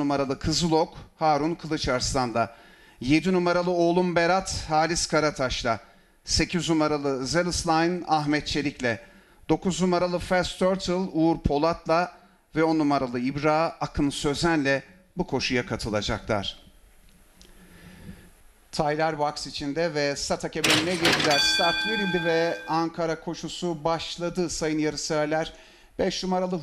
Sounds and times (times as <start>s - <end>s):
Speech: 0.0s - 16.7s, 18.7s - 26.6s.